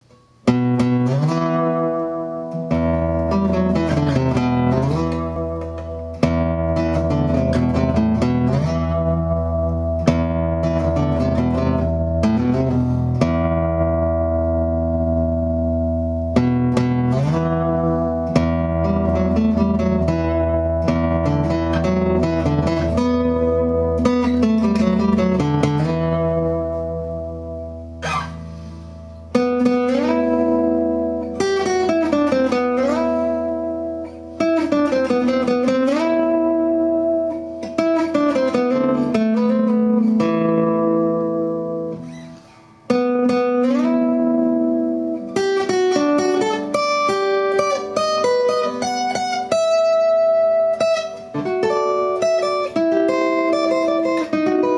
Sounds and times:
Acoustic guitar: 0.0 - 54.7.

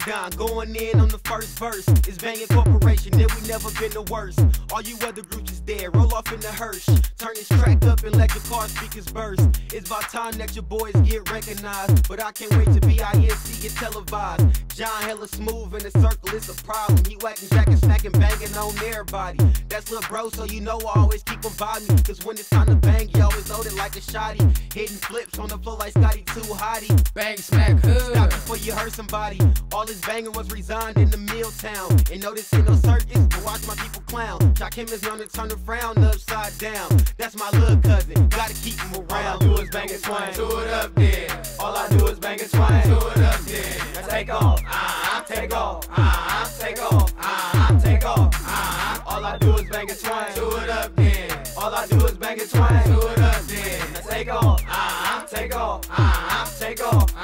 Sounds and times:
Music: 0.0 - 57.2.

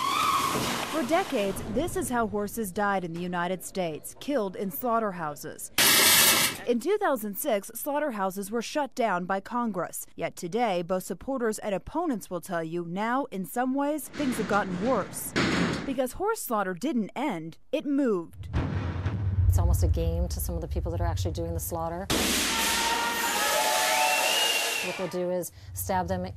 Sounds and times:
Speech: 1.0 - 5.7, 6.6 - 15.3, 15.9 - 18.4, 19.5 - 22.1, 24.8 - 26.3.

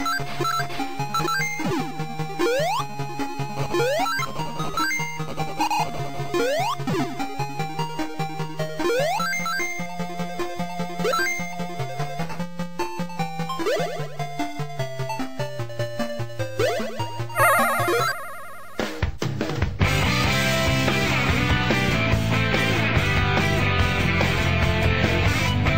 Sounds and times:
Video game music: 0.0 - 25.7
Exciting music: 16.5 - 19.2.

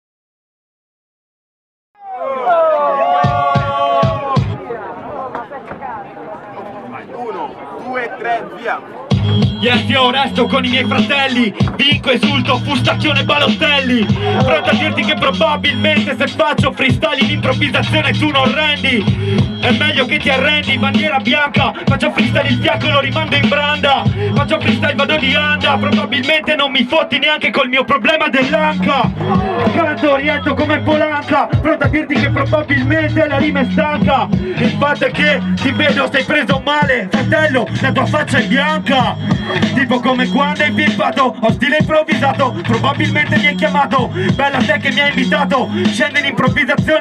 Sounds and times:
Music: 3.1 - 4.6, 9.1 - 47.0.

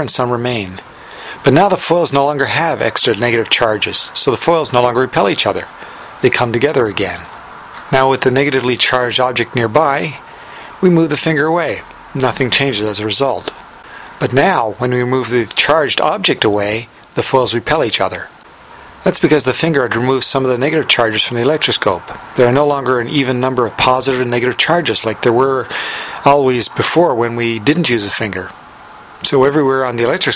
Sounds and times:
Speech: 0.0 - 13.6, 14.2 - 18.4, 19.0 - 28.6, 29.2 - 30.3.

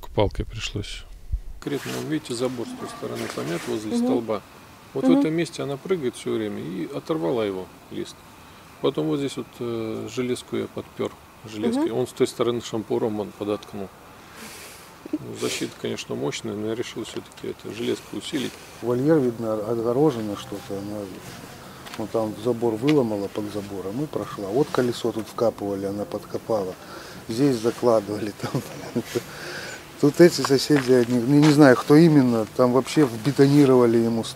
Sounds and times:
Speech: 0.0 - 4.4, 5.0 - 8.2, 8.8 - 13.9, 15.1 - 21.2, 21.9 - 29.2, 30.0 - 34.3.

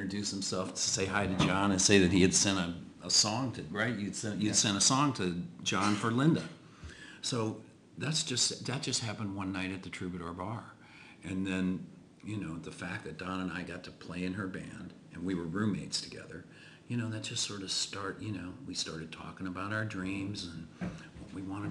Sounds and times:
Speech: 0.0 - 6.6, 7.2 - 21.7.

